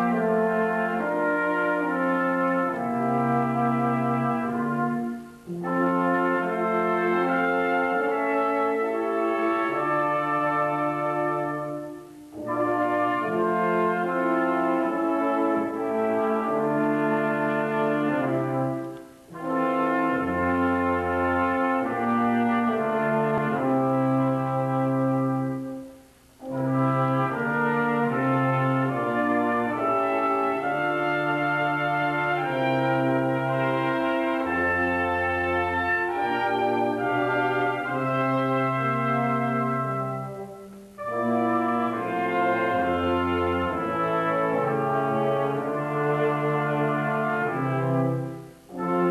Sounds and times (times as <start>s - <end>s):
Music: 0.0s - 49.1s.